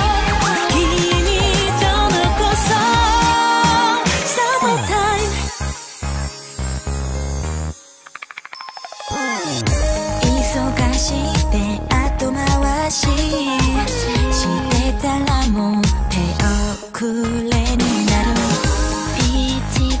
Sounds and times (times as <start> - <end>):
Music of Asia: 0.0 - 20.0.